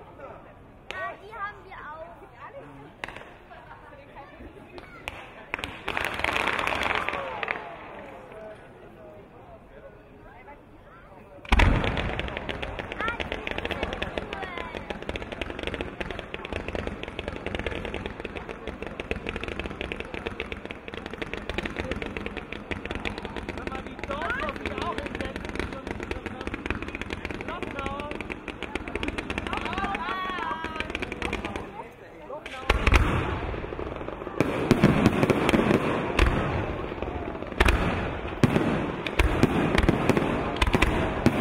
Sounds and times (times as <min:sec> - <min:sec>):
Fireworks: 0:00.8 - 0:09.0, 0:11.4 - 0:41.4.